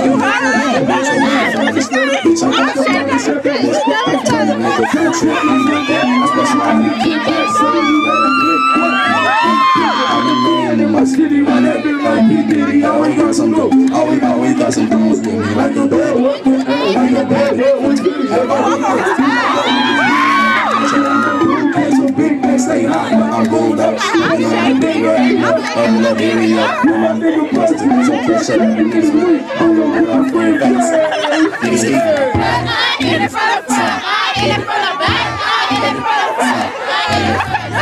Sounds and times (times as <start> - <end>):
Music: 0.0 - 37.8
Whoop: 5.4 - 6.7, 7.3 - 10.7, 19.4 - 21.6.